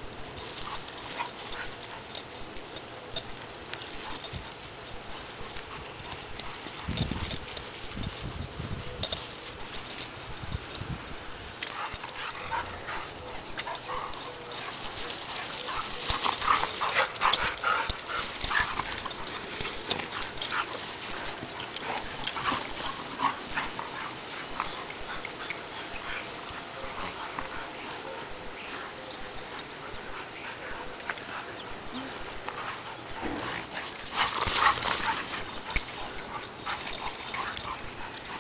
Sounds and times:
Dog: 0:11.7 - 0:38.4.

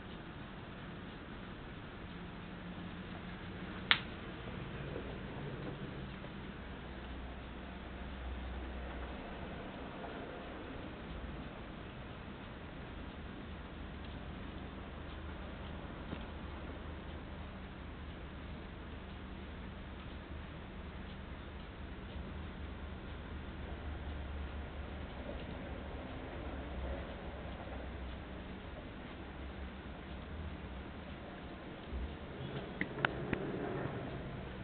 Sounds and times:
Tick-tock: 0:00.0 - 0:34.6
Tick: 0:03.9 - 0:04.1, 0:14.0 - 0:17.2, 0:18.1 - 0:19.3, 0:19.9 - 0:20.3, 0:21.0 - 0:25.6, 0:30.1 - 0:30.6, 0:31.4 - 0:33.5.

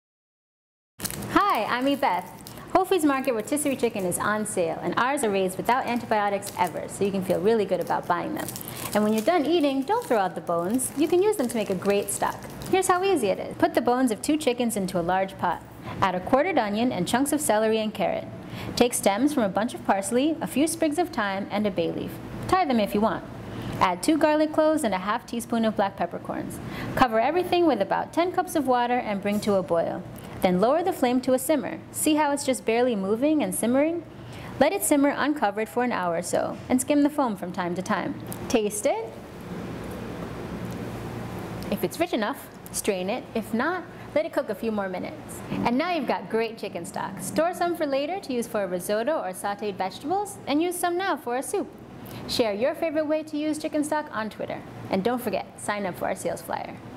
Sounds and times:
Speech: 0:01.4 - 0:34.0, 0:34.6 - 0:39.1, 0:41.7 - 0:51.7, 0:52.3 - 0:56.8.

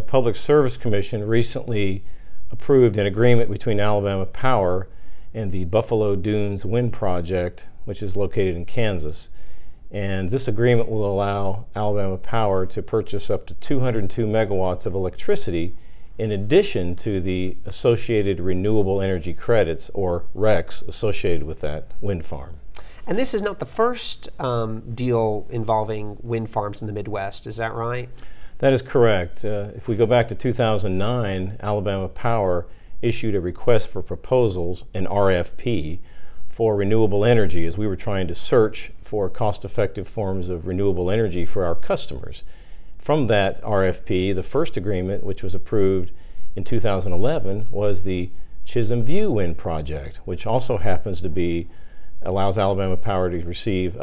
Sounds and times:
Speech: 0:00.0 - 0:09.3, 0:10.0 - 0:42.4, 0:43.0 - 0:54.0.

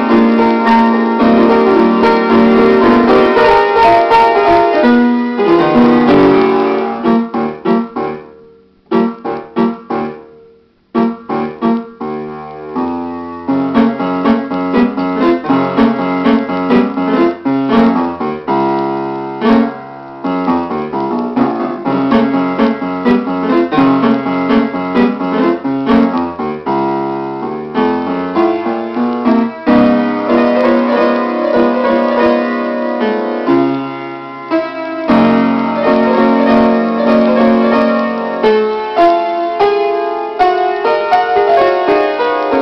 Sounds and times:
Piano: 0:00.0 - 0:42.6.

